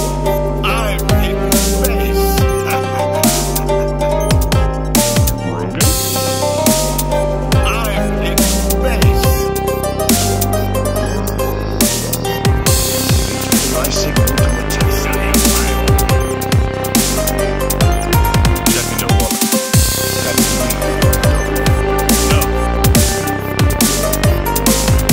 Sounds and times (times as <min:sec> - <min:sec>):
Dubstep: 0:00.0 - 0:25.1
Speech: 0:00.6 - 0:03.1, 0:05.3 - 0:06.0, 0:07.6 - 0:09.5, 0:13.6 - 0:15.9, 0:18.6 - 0:19.3.